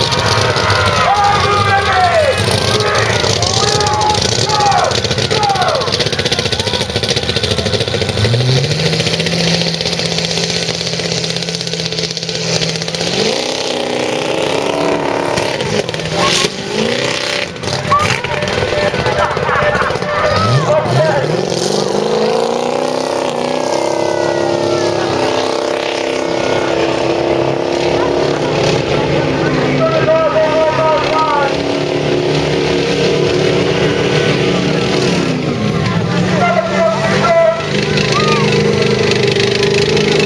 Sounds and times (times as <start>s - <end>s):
Truck: 0.0s - 40.2s
Speech: 1.0s - 5.9s, 17.9s - 21.3s, 29.4s - 31.6s, 35.9s - 38.5s.